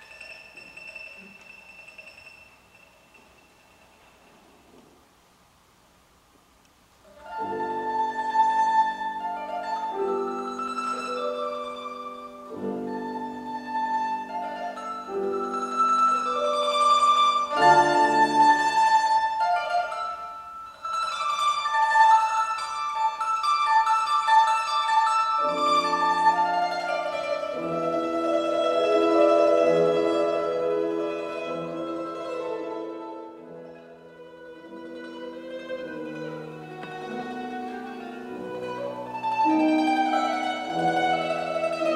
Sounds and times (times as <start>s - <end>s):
Mandolin: 0.0s - 5.2s, 7.0s - 41.9s
Piano: 7.1s - 41.9s.